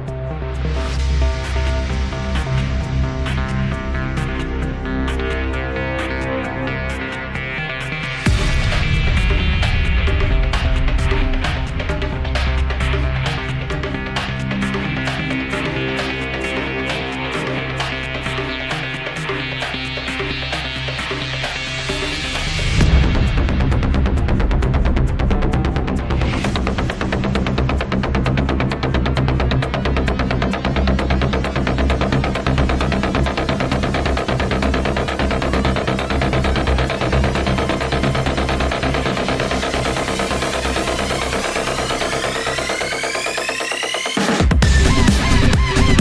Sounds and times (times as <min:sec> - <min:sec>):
Music: 0:00.0 - 0:46.0.